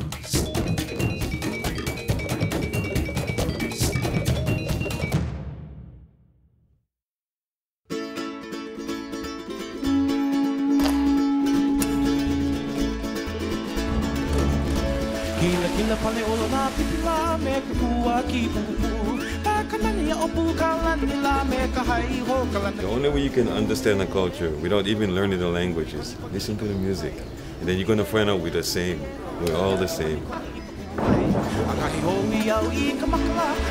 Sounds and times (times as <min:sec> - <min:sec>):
Music: 0:00.0 - 0:06.2, 0:07.9 - 0:26.7, 0:29.9 - 0:33.7
Speech: 0:22.8 - 0:32.3.